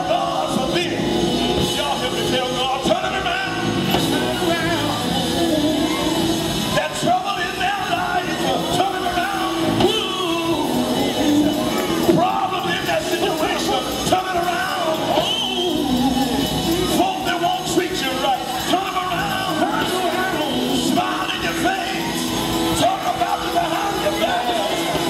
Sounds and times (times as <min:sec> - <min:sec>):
Male singing: 0:00.0 - 0:25.0
Music: 0:00.0 - 0:25.0.